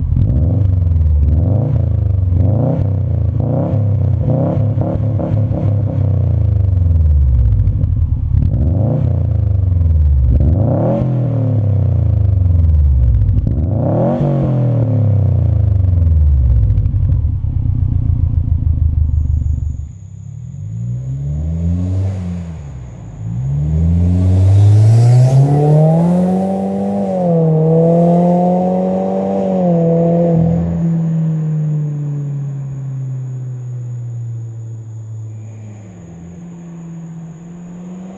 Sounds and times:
Car: 0.0s - 38.1s
Accelerating, revving, vroom: 0.2s - 6.3s, 8.5s - 9.4s, 10.3s - 12.0s, 13.5s - 15.5s, 20.8s - 32.0s, 35.5s - 38.1s.

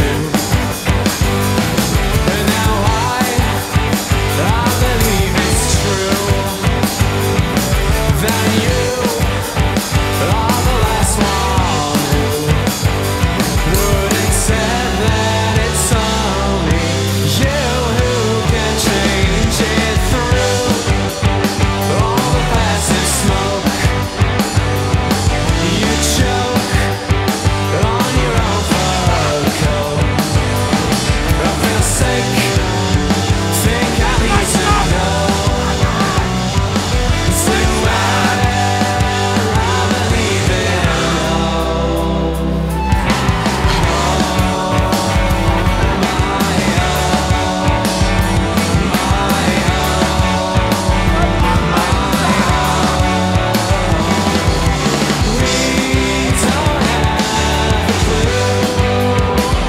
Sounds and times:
Independent music: 0.0s - 59.6s.

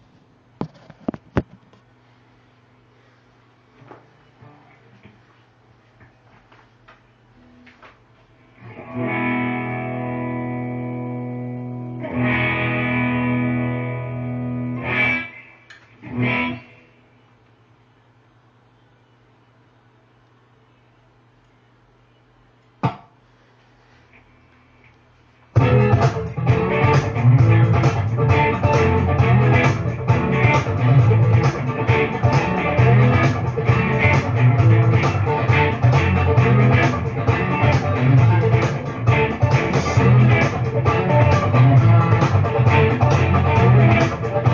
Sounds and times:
Electric guitar: 8.6s - 16.8s, 25.6s - 44.5s.

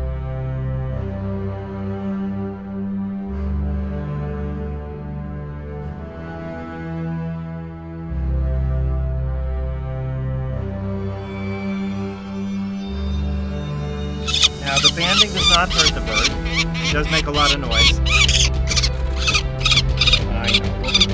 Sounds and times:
Music: 0.0s - 21.1s
Outside, rural or natural: 0.0s - 21.1s
Bird: 14.3s - 21.1s
Speech: 14.6s - 18.1s, 20.2s - 20.6s.

